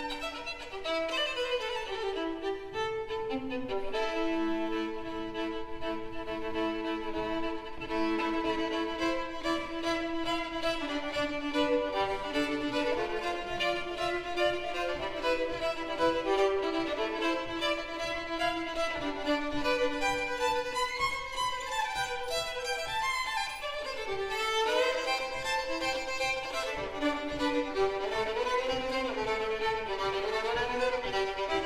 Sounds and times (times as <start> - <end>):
Classical music: 0.0 - 31.6
Violin, fiddle: 0.0 - 31.6.